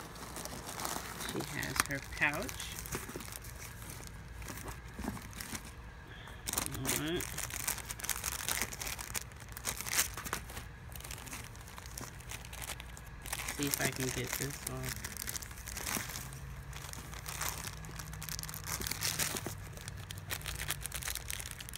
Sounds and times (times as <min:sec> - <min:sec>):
Crumpling, crinkling: 0:00.0 - 0:21.7
Speech: 0:01.2 - 0:02.8, 0:06.6 - 0:07.3, 0:13.5 - 0:15.0.